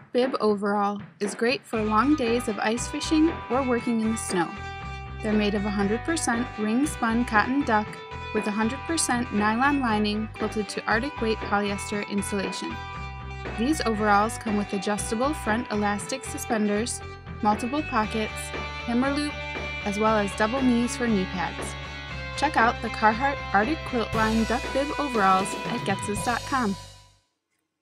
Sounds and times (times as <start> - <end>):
Music: 0.0 - 27.2
Speech: 0.1 - 4.6, 5.2 - 12.8, 13.6 - 21.7, 22.4 - 26.8.